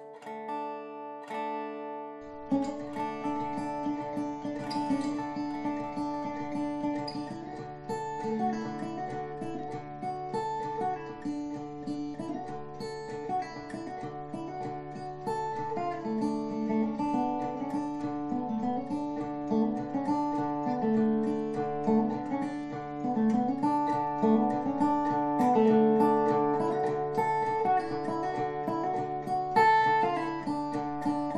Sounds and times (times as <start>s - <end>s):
Strum: 0.0s - 31.3s.